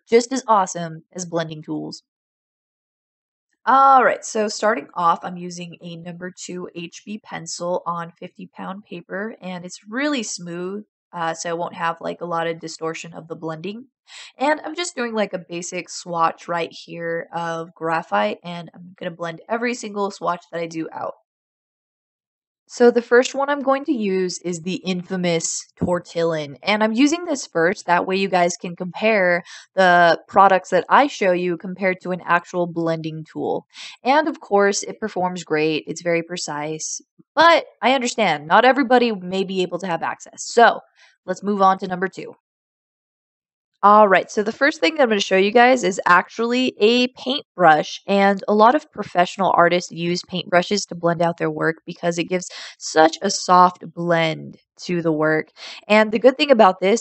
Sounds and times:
Speech: 0:00.0 - 0:02.0, 0:03.7 - 0:21.2, 0:22.7 - 0:42.4, 0:43.8 - 0:57.0.

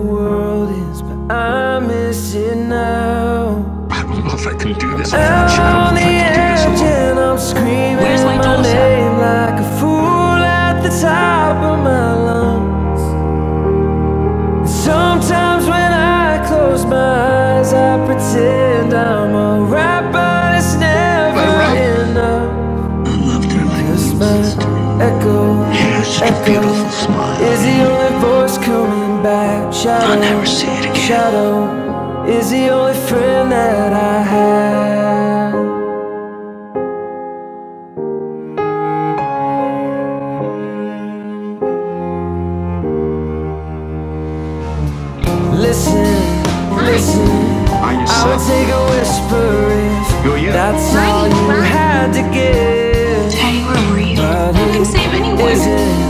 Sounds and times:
Music: 0:00.0 - 0:56.1
Speech: 0:03.9 - 0:09.4, 0:21.0 - 0:22.3, 0:23.0 - 0:28.6, 0:29.8 - 0:31.4, 0:46.7 - 0:56.1.

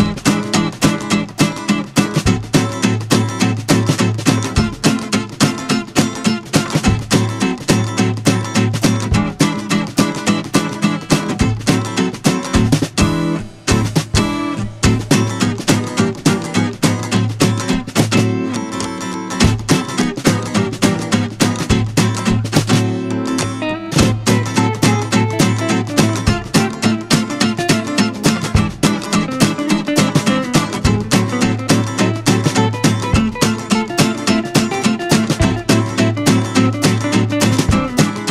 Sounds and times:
Music: 0:00.0 - 0:38.3.

